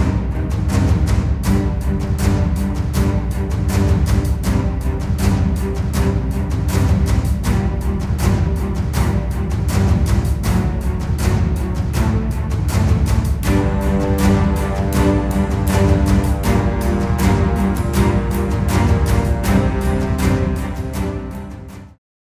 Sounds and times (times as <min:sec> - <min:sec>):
Music: 0:00.0 - 0:22.0.